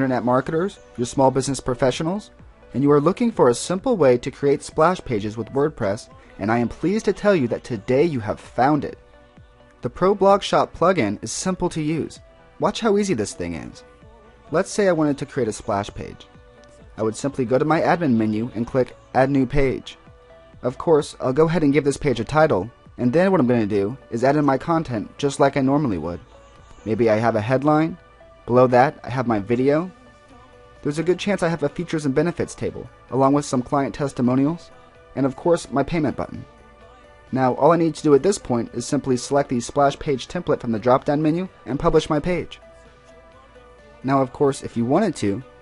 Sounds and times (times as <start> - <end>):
Speech: 0.0 - 9.0, 9.8 - 13.8, 14.5 - 16.3, 17.0 - 20.0, 20.6 - 26.2, 26.8 - 30.0, 30.8 - 36.5, 37.3 - 42.6, 44.0 - 45.5
Music: 0.0 - 45.6.